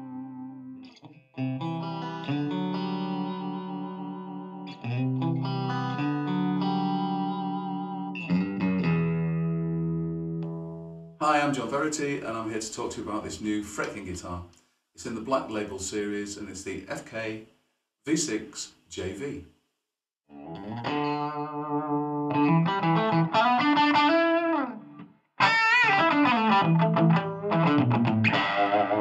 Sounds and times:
Speech: 11.2 - 17.5, 18.1 - 19.5.

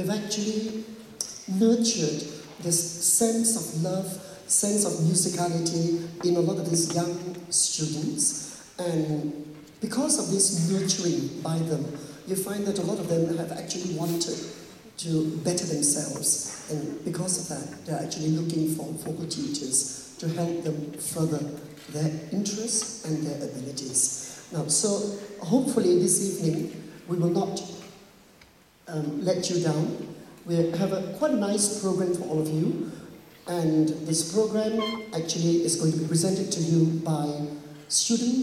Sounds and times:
Speech: 0.0 - 27.9, 28.9 - 38.4.

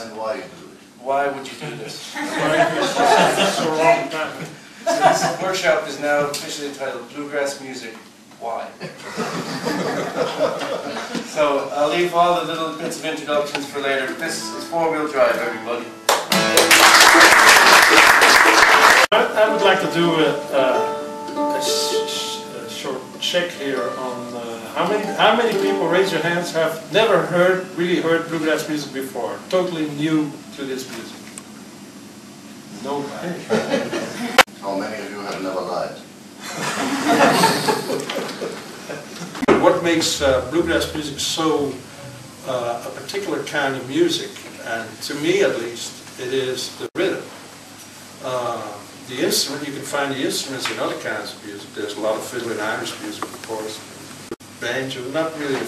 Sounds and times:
Speech: 0.0 - 8.8, 11.2 - 16.7, 17.9 - 20.9, 21.5 - 31.2, 32.8 - 33.8, 34.6 - 36.1, 39.5 - 47.4, 48.2 - 53.9, 54.6 - 55.6.

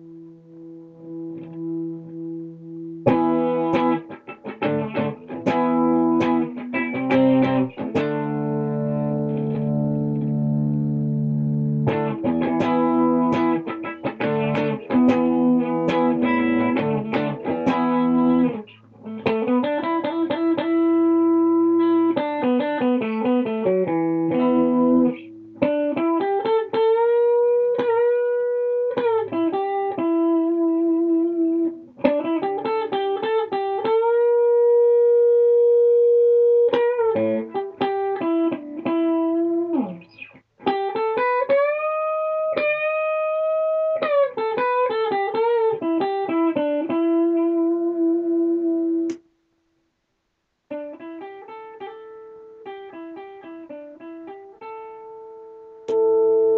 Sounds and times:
Guitar: 0.0 - 49.6, 50.6 - 56.5.

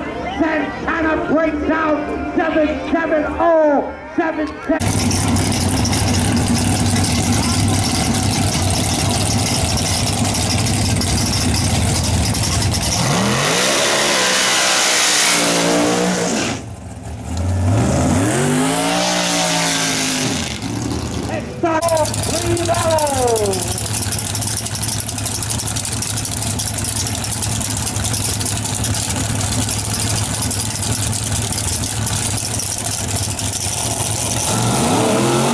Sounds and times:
Race car, auto racing: 4.4 - 35.5
Medium engine (mid frequency): 4.6 - 35.5.

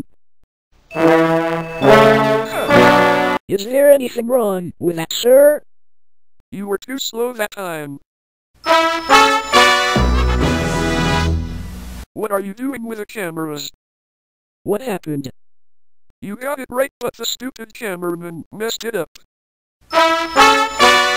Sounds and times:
Music: 0.9 - 3.4, 8.6 - 12.0, 19.9 - 21.1
Speech: 3.5 - 5.6, 6.5 - 8.0, 12.2 - 13.8, 14.7 - 15.3, 16.2 - 19.3.

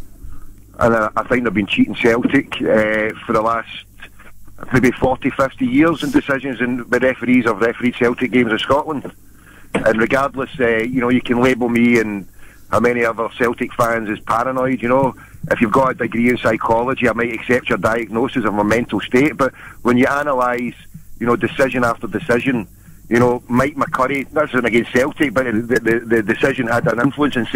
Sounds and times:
Speech: 0.8 - 9.2, 9.8 - 27.5
Radio: 0.8 - 27.5.

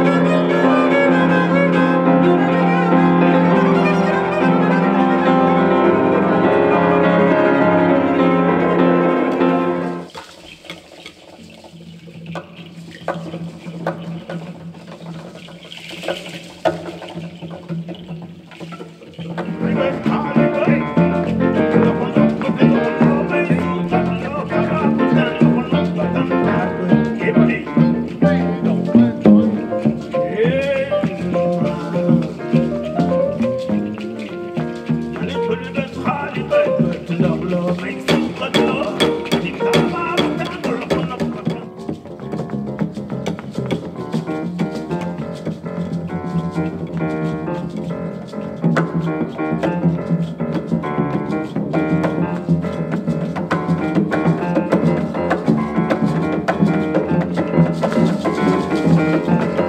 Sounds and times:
Cello: 0.0 - 10.1, 12.4 - 59.6
Classical music: 0.0 - 10.2, 12.0 - 59.6
Piano: 0.0 - 59.6.

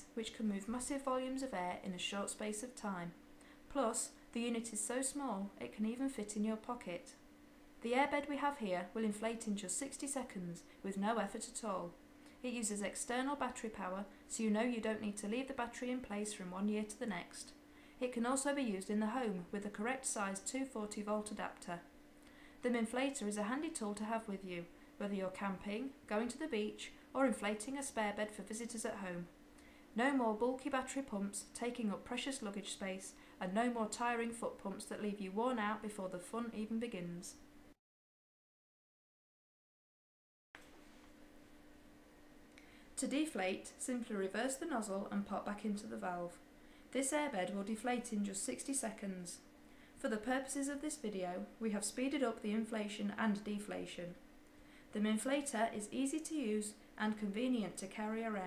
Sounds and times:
Speech: 0.0 - 7.2, 7.8 - 21.9, 22.6 - 29.3, 30.0 - 37.4, 43.0 - 46.4, 47.0 - 54.2, 54.9 - 58.4.

